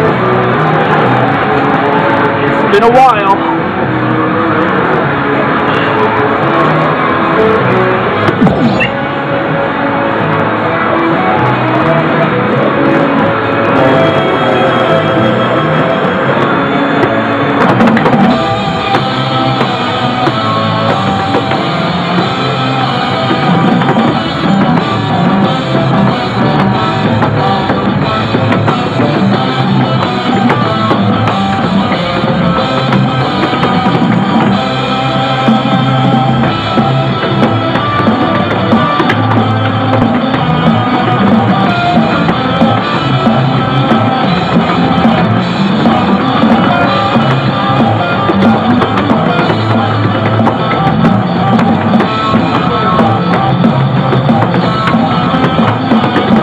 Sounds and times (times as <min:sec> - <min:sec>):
Music: 0:00.0 - 0:56.4
Speech: 0:02.5 - 0:03.6.